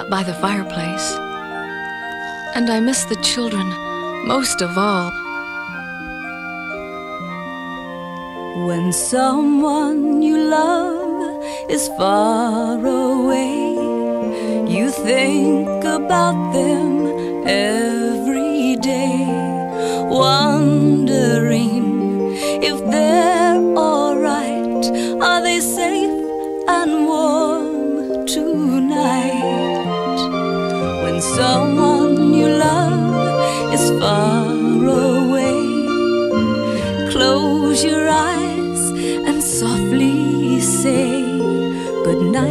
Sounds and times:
Speech: 0.0s - 1.2s, 2.6s - 5.2s
Music: 0.0s - 42.5s.

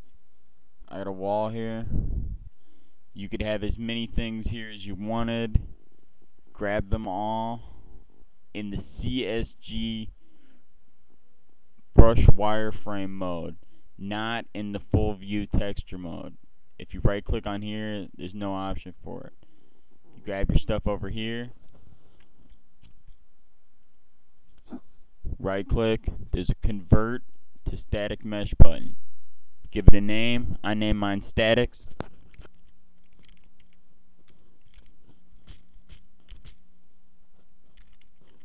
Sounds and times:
Speech: 0.9s - 2.0s, 3.2s - 5.7s, 6.5s - 7.8s, 8.6s - 10.1s, 12.0s - 19.4s, 20.2s - 21.6s, 25.3s - 28.9s, 29.7s - 31.9s.

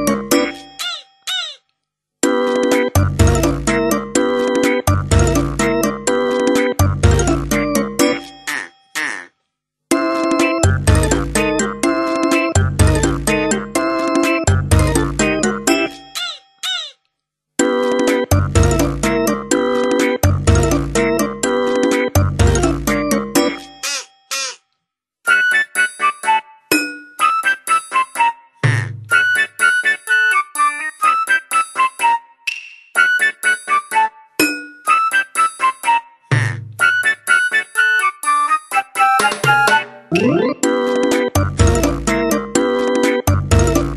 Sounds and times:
Music: 0.0s - 0.8s, 2.2s - 8.7s, 9.9s - 16.2s, 17.6s - 24.6s, 25.2s - 43.9s.

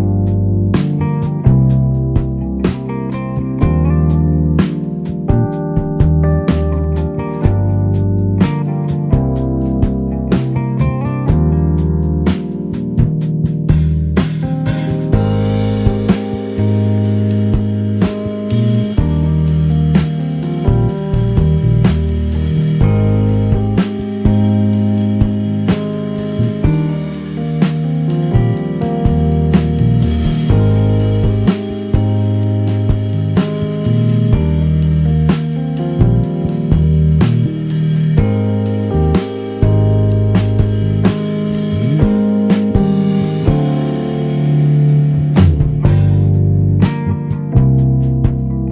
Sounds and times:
Music: 0.0s - 48.7s.

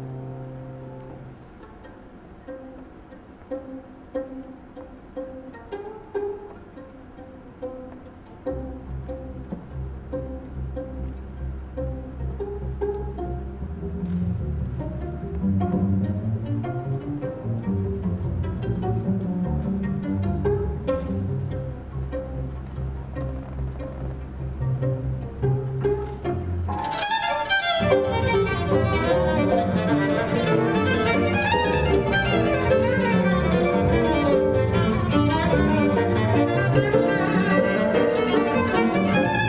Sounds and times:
Violin, fiddle: 0.0s - 39.4s.

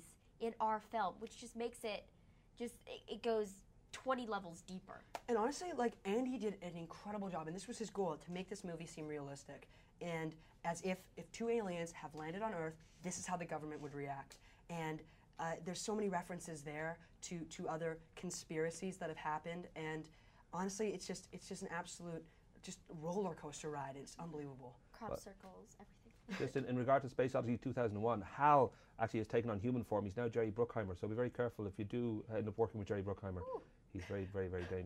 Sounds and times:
Inside, small room: 0.0s - 34.8s.

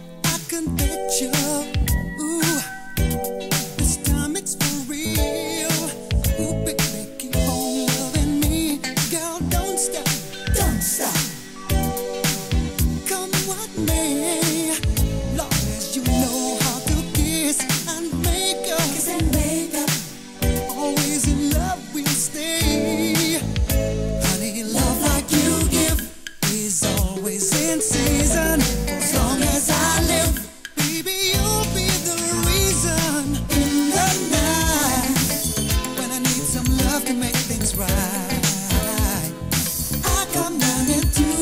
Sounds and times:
Disco: 0.0s - 41.4s
Funk: 0.0s - 41.4s.

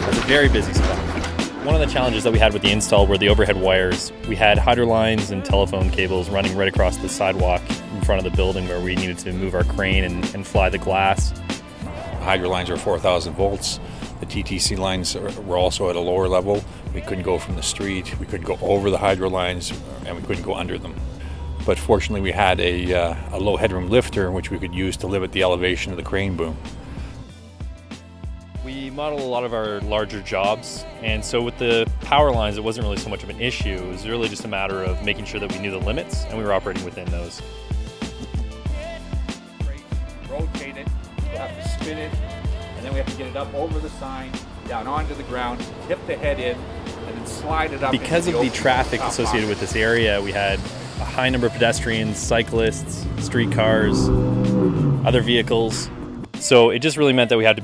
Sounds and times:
Speech: 0.0s - 11.3s, 12.0s - 21.0s, 21.7s - 26.6s, 28.6s - 37.4s, 40.2s - 42.2s, 42.8s - 54.1s, 55.1s - 57.6s
Music: 0.0s - 57.6s.

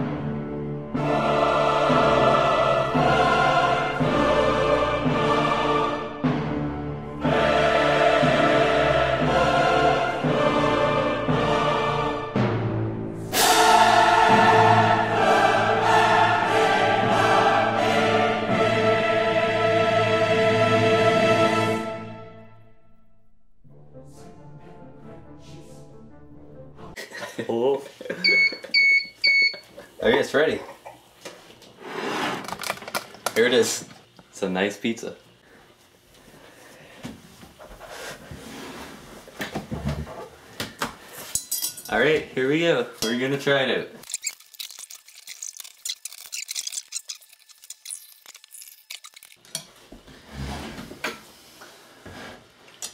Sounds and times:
Music: 0.0s - 27.0s
Speech: 30.0s - 30.8s, 33.4s - 35.2s, 41.9s - 44.0s.

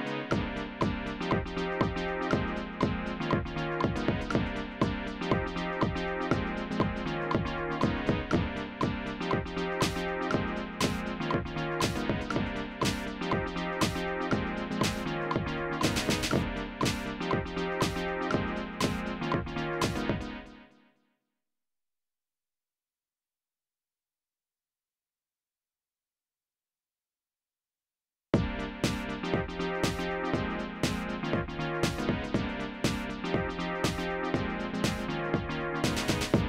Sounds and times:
Electronica: 0.0s - 20.8s, 28.4s - 36.4s.

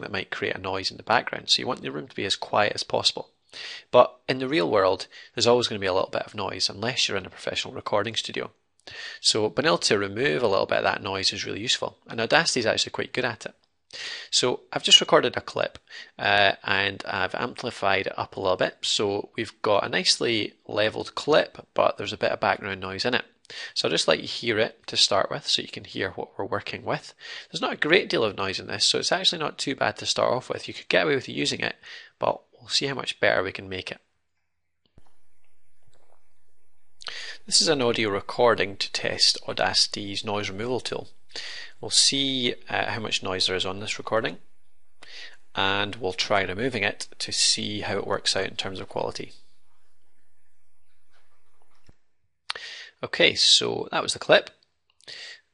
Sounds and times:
Speech: 0.0s - 34.0s, 37.1s - 44.4s, 45.1s - 49.4s, 52.5s - 55.4s.

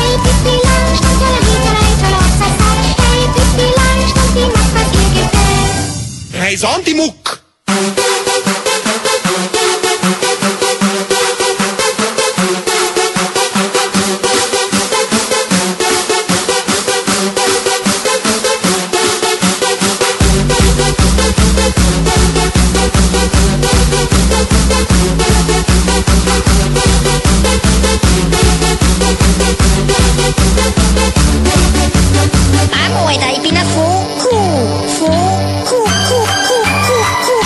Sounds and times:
Techno: 0.0s - 7.0s, 7.7s - 37.4s
Speech: 6.3s - 7.4s, 32.7s - 37.1s.

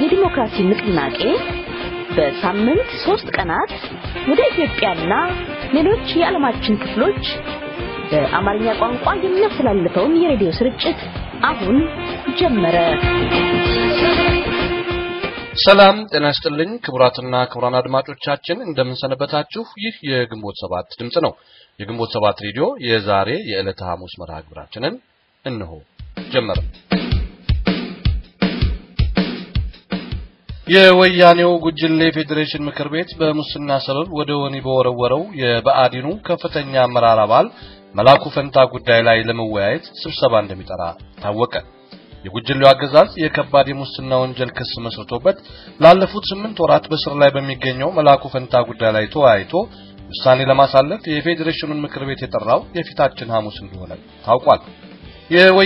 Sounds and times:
Speech: 0.0s - 1.4s, 2.2s - 3.7s, 4.3s - 7.4s, 8.1s - 13.0s, 15.6s - 26.7s, 30.7s - 41.7s, 42.3s - 54.7s, 55.3s - 55.6s
Music: 0.0s - 18.0s, 25.9s - 55.6s.

